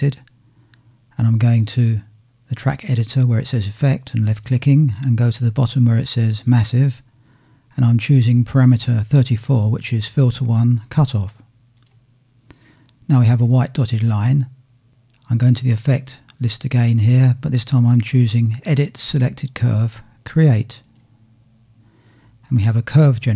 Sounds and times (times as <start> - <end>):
Speech: 0.0 - 0.3, 1.1 - 7.0, 7.7 - 11.5, 13.1 - 14.6, 15.2 - 20.9, 22.4 - 23.3.